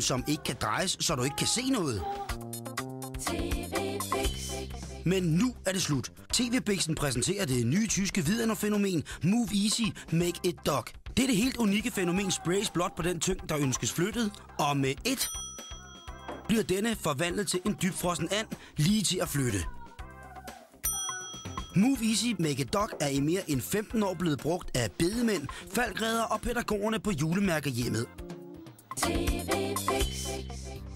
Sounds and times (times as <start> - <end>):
Speech: 0.0 - 2.2, 5.1 - 15.4, 16.5 - 19.9, 21.8 - 28.1
Music: 0.0 - 30.9.